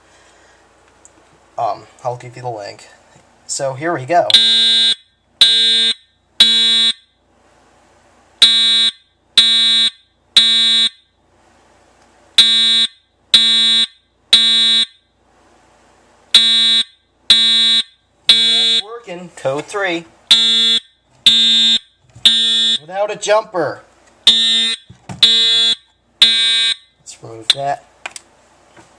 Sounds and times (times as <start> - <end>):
Fire alarm: 4.3 - 7.2, 8.4 - 11.1, 12.4 - 15.1, 16.4 - 18.9, 20.3 - 22.9, 24.3 - 27.0.